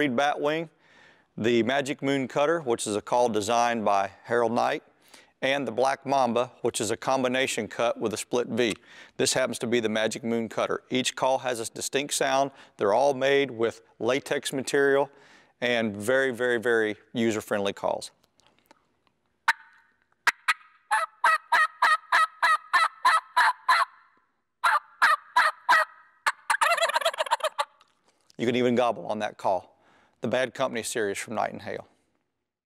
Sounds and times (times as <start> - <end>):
Gobble: 19.5 - 24.0, 24.6 - 27.8.